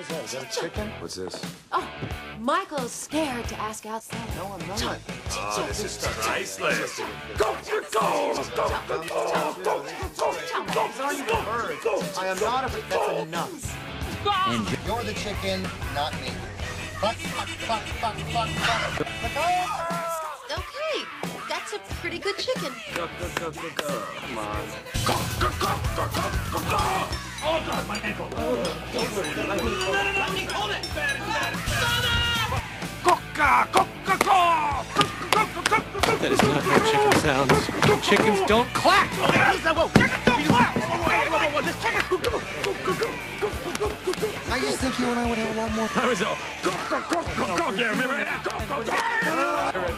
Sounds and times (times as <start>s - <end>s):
Music: 0.0s - 49.9s.